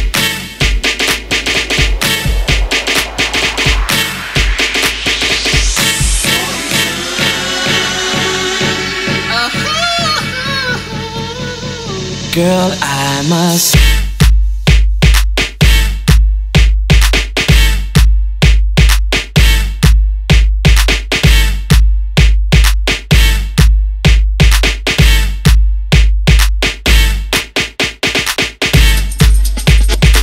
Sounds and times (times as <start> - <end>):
Music: 0.0 - 30.2.